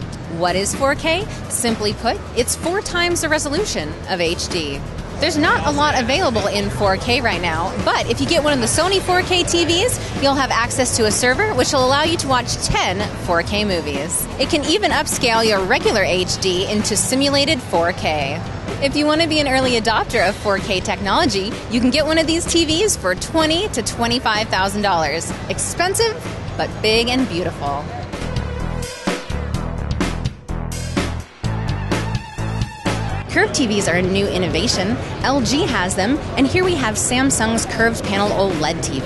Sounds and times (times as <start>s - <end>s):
Music: 0.0s - 39.0s
Speech: 0.3s - 27.9s, 33.3s - 39.0s.